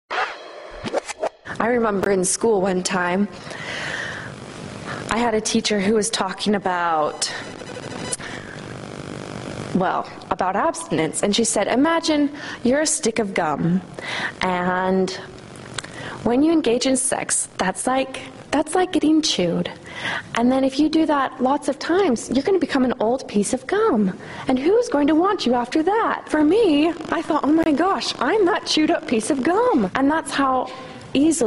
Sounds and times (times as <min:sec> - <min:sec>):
Speech: 0:01.5 - 0:03.4, 0:05.1 - 0:07.4, 0:09.8 - 0:15.3, 0:16.2 - 0:19.8, 0:20.4 - 0:31.4.